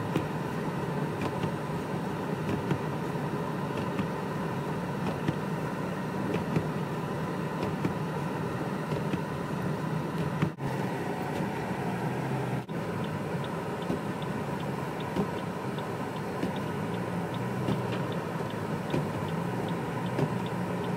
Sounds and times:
Bus: 0.0 - 20.9.

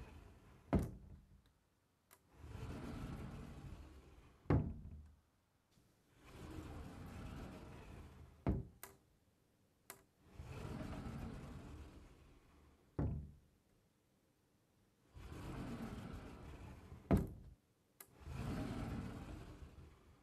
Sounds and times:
Sliding door: 0.0 - 9.1, 9.9 - 13.7, 14.9 - 20.2.

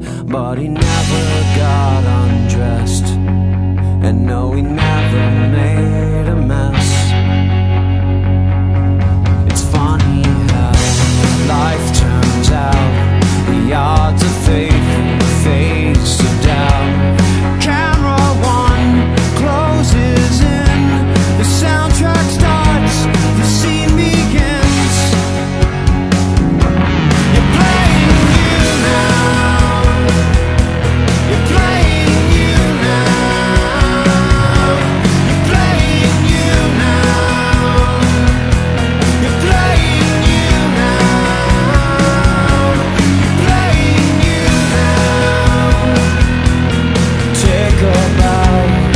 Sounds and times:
Music: 0.0 - 48.9.

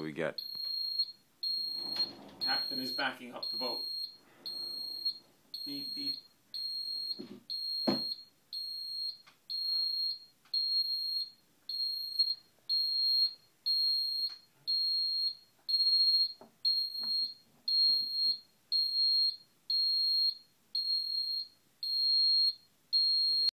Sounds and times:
Smoke detector, smoke alarm: 0.4 - 23.5.

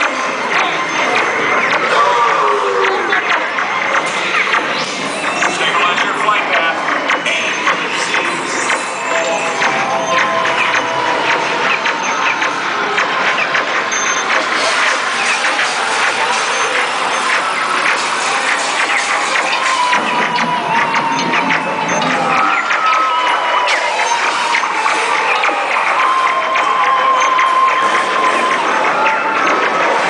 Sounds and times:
Music: 0.0 - 30.1
Speech: 5.4 - 8.5.

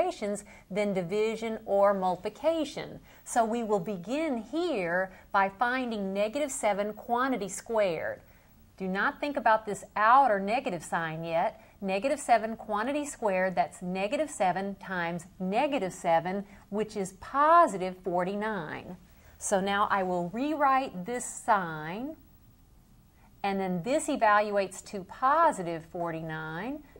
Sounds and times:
Speech: 0.0 - 8.2, 8.8 - 22.2, 23.4 - 26.9.

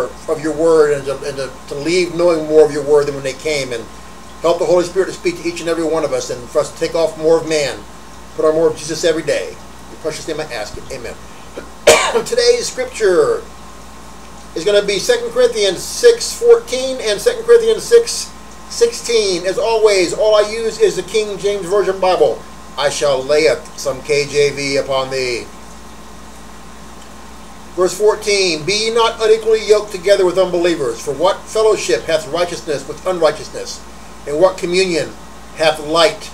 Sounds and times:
Speech: 0.0 - 11.2, 12.1 - 13.5, 14.6 - 25.5, 27.8 - 36.3.

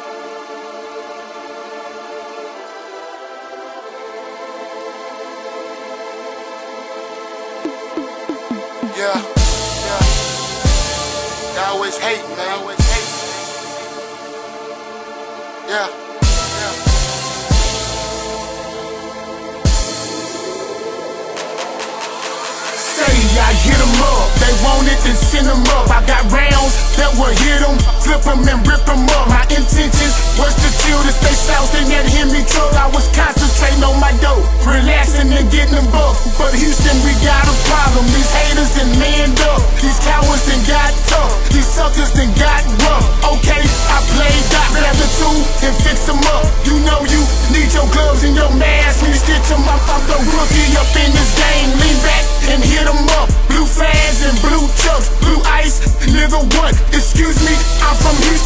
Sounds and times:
Music: 0.0 - 58.4.

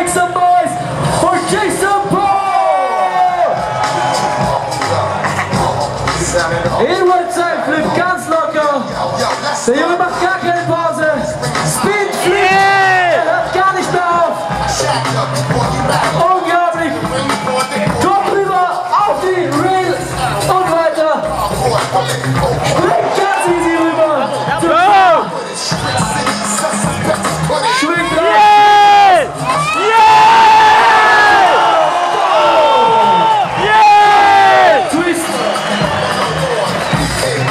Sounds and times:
Speech: 0.0 - 2.6, 6.3 - 8.9, 9.6 - 14.4, 16.2 - 17.0, 18.0 - 21.3
Music: 0.0 - 37.5.

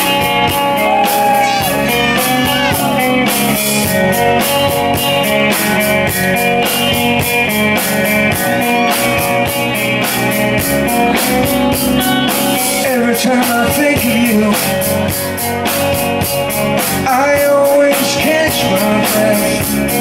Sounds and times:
Music: 0.0 - 20.0.

